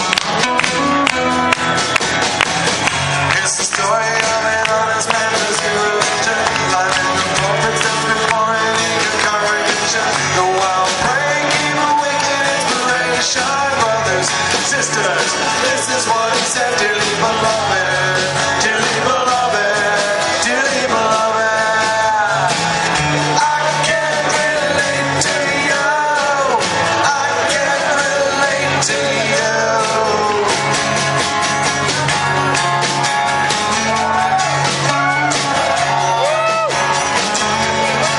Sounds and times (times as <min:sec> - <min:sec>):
Rock and roll: 0:00.0 - 0:38.1
Singing: 0:03.3 - 0:30.9, 0:33.7 - 0:38.1.